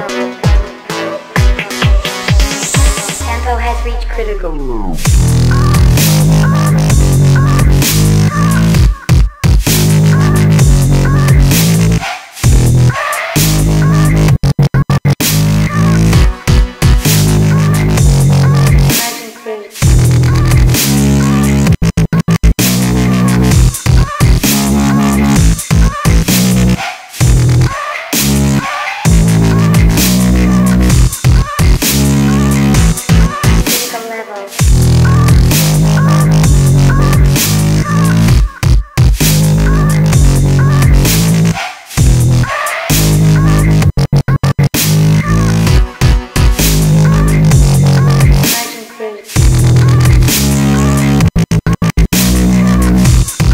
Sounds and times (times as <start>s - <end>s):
Dubstep: 0.0s - 53.5s.